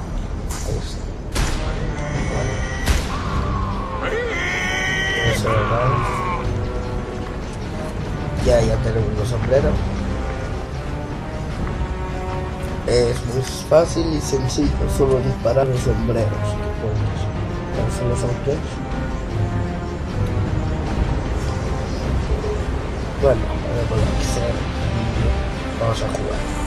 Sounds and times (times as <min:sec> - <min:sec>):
Music: 0:00.0 - 0:26.6.